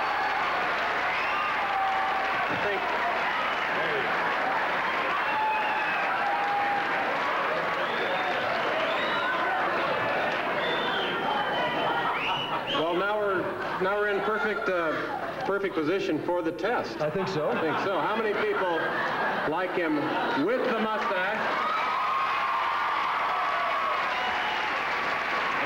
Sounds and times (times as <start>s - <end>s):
Male speech, man speaking: 12.8s - 18.9s, 19.5s - 21.5s.